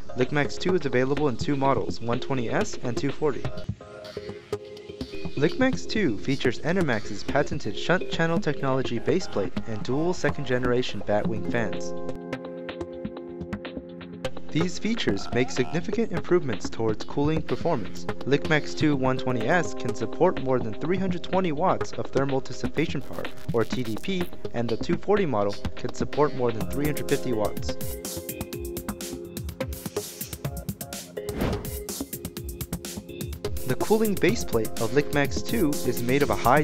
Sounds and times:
Music: 0:00.0 - 0:36.6
Speech: 0:00.2 - 0:03.6, 0:05.4 - 0:11.9, 0:14.5 - 0:27.8, 0:33.7 - 0:36.6.

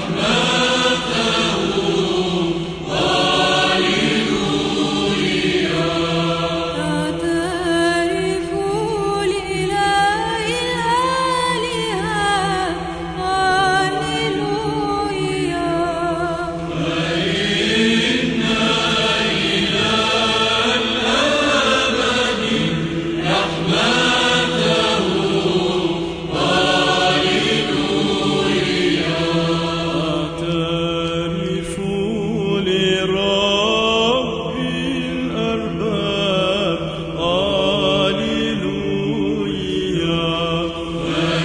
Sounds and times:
Choir: 0:00.0 - 0:41.4
Female singing: 0:06.8 - 0:16.6.

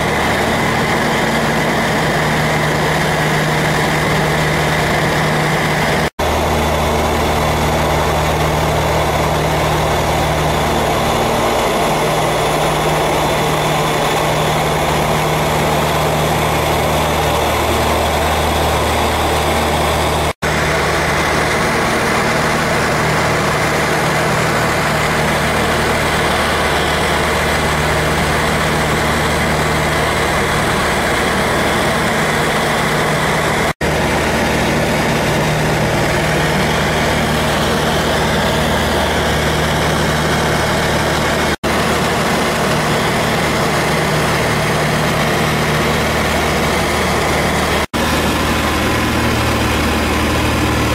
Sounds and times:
Outside, rural or natural: 0:00.0 - 0:50.9
Propeller, airscrew: 0:00.0 - 0:50.9.

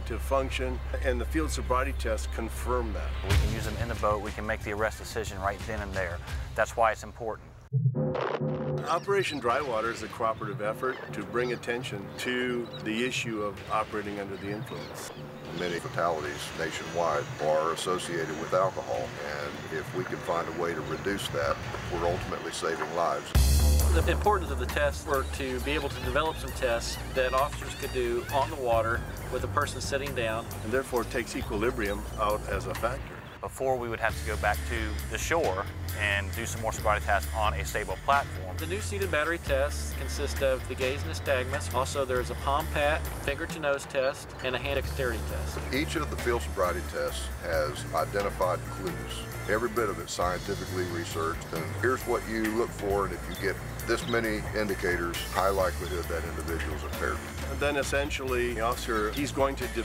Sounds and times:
Speech: 0:00.0 - 0:07.5, 0:08.8 - 0:59.8
Music: 0:00.0 - 0:59.8.

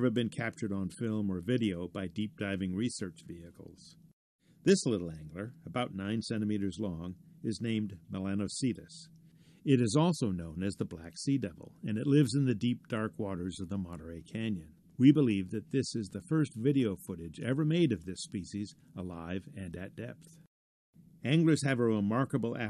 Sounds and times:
Speech: 0:00.0 - 0:04.0, 0:04.6 - 0:20.5, 0:21.2 - 0:22.6.

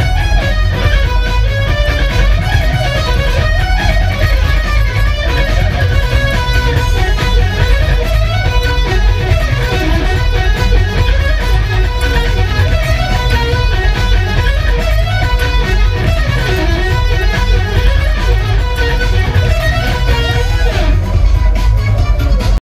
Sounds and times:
Electric guitar: 0:00.0 - 0:22.6.

